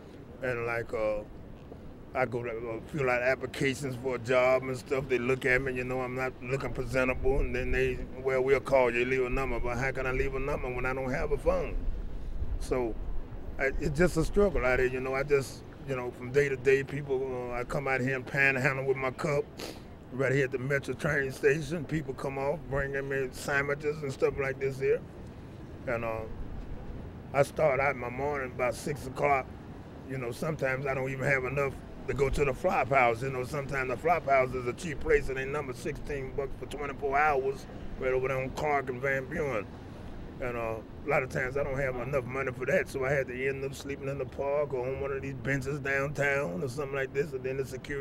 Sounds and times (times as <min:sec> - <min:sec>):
Speech: 0:00.4 - 0:01.3, 0:02.1 - 0:11.8, 0:12.6 - 0:13.0, 0:13.6 - 0:19.5, 0:20.1 - 0:25.0, 0:25.9 - 0:26.4, 0:27.3 - 0:29.5, 0:30.1 - 0:39.6, 0:40.4 - 0:48.0.